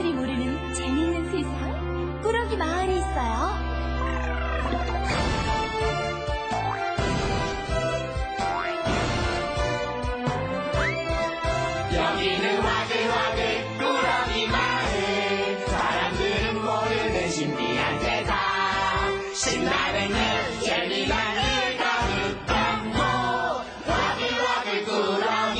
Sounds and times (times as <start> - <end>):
Music: 0.0 - 25.5.